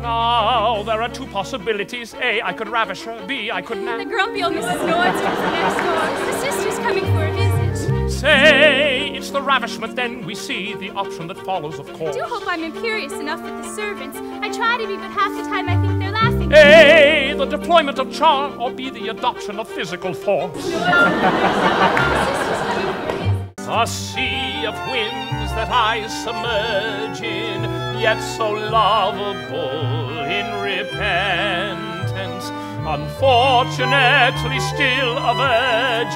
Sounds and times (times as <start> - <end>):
Music: 0.0 - 36.1.